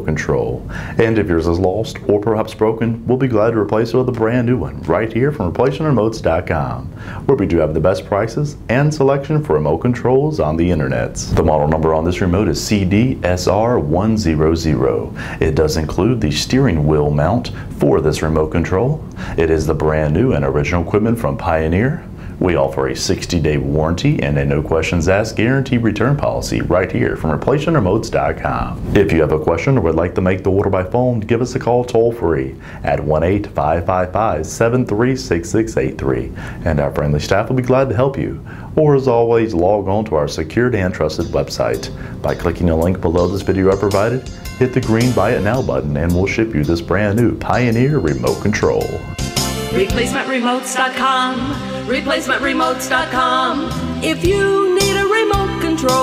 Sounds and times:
Speech: 0:00.0 - 0:49.1, 0:49.8 - 0:56.0.

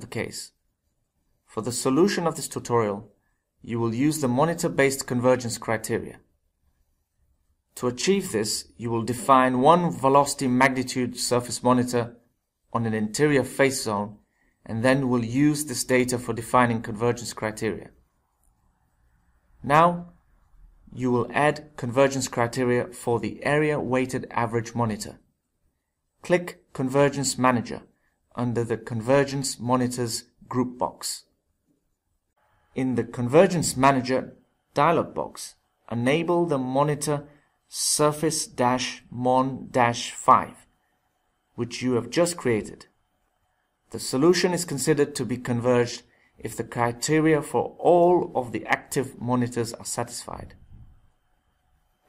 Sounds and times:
Speech: 0:00.0 - 0:00.6, 0:01.5 - 0:06.3, 0:07.8 - 0:18.0, 0:19.6 - 0:20.2, 0:20.9 - 0:25.3, 0:26.2 - 0:31.3, 0:32.8 - 0:40.7, 0:41.6 - 0:43.0, 0:43.9 - 0:50.7.

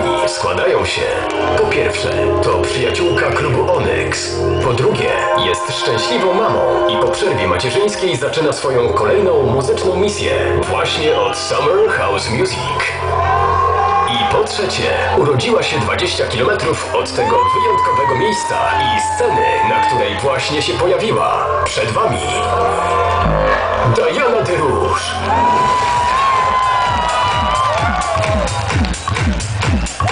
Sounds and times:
Music: 0:00.0 - 0:30.1
Speech: 0:00.1 - 0:13.0, 0:14.1 - 0:22.5, 0:23.8 - 0:25.2.

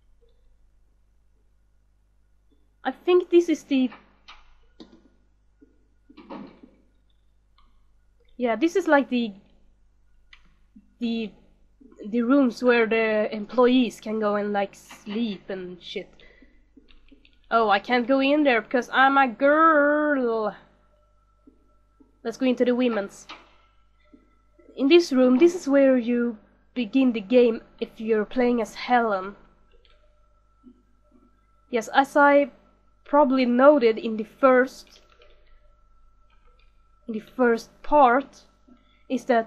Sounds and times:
Speech: 0:02.9 - 0:04.0, 0:08.4 - 0:09.4, 0:11.0 - 0:11.3, 0:12.0 - 0:16.1, 0:17.5 - 0:20.6, 0:22.3 - 0:23.3, 0:24.8 - 0:29.4, 0:31.8 - 0:32.5, 0:33.1 - 0:35.0, 0:37.1 - 0:38.4, 0:39.1 - 0:39.4.

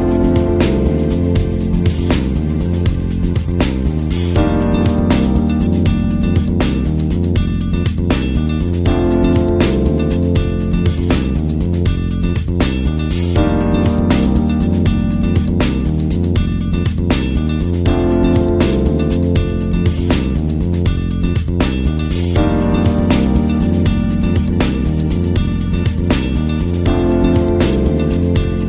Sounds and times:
Music: 0:00.0 - 0:28.6.

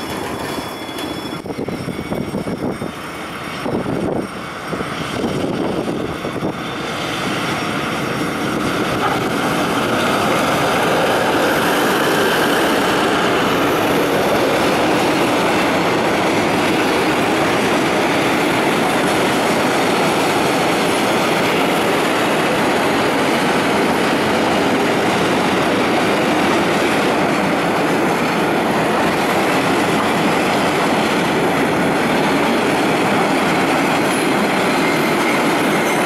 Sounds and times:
Railroad car, train wagon: 0:00.0 - 0:36.0
Train: 0:00.0 - 0:36.0.

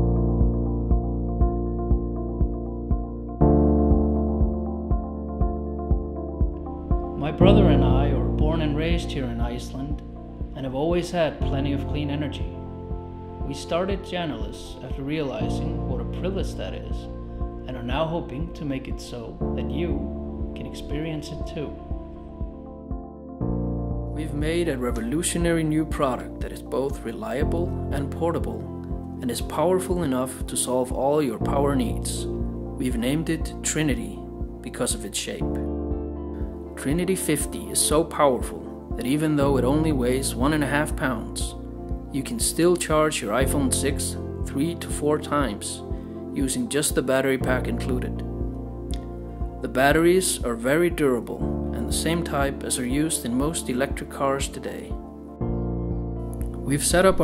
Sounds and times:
Music: 0:00.0 - 0:57.2
Speech: 0:07.2 - 0:10.0, 0:10.6 - 0:12.6, 0:13.4 - 0:17.1, 0:17.7 - 0:21.8, 0:24.2 - 0:35.6, 0:36.8 - 0:48.3, 0:49.6 - 0:55.0, 0:56.6 - 0:57.2.

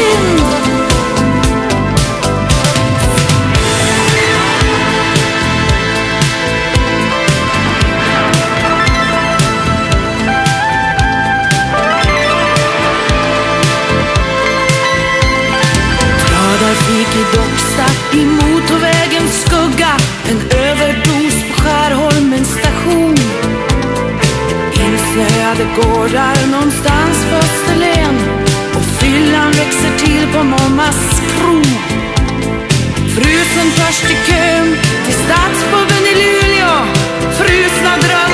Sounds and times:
Christian music: 0:00.0 - 0:38.3.

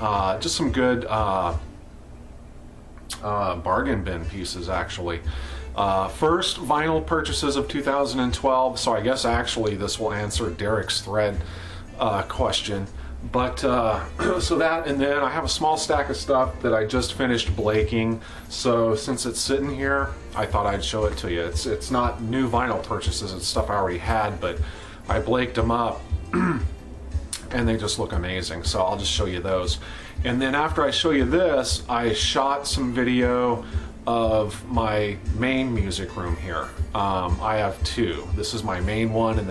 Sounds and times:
Speech: 0:00.0 - 0:01.7, 0:03.1 - 0:26.7, 0:27.4 - 0:39.5
Background music: 0:03.0 - 0:39.5.

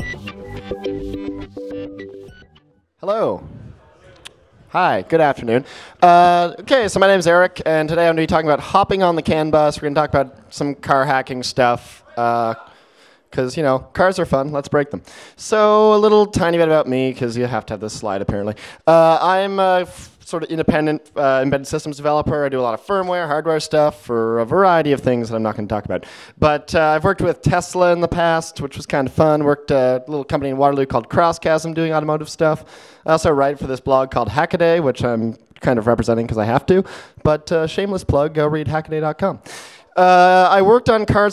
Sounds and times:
Speech: 0:03.0 - 0:12.7, 0:13.3 - 0:39.4, 0:40.0 - 0:41.3.

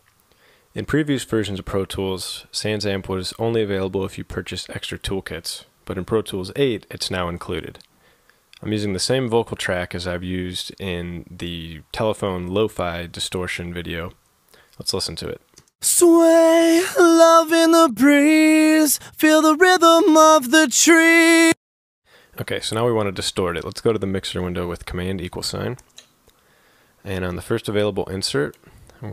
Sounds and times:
Speech: 0:00.8 - 0:07.8, 0:08.6 - 0:14.2, 0:14.8 - 0:18.1, 0:22.4 - 0:25.8, 0:27.1 - 0:29.1.

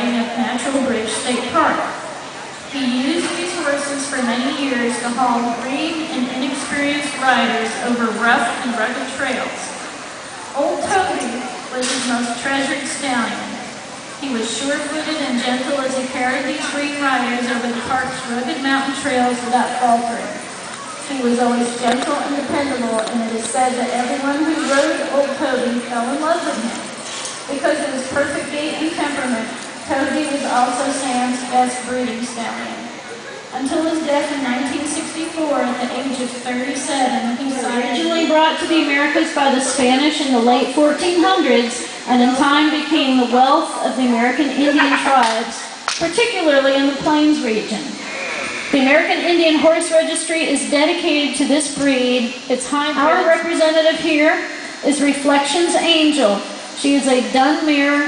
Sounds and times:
Speech: 0:00.0 - 0:02.0, 0:02.7 - 0:09.8, 0:10.5 - 0:13.6, 0:14.2 - 0:58.0.

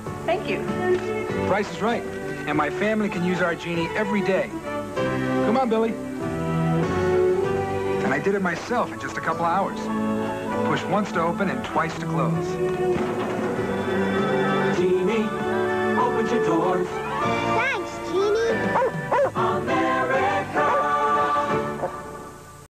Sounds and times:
Music: 0:00.0 - 0:22.7.

